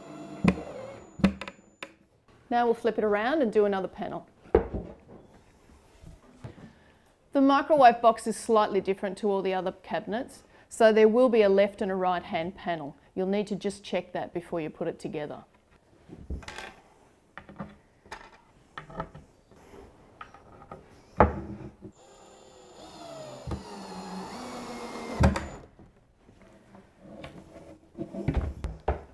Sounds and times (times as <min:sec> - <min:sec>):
Speech: 0:02.5 - 0:04.3, 0:07.3 - 0:15.5.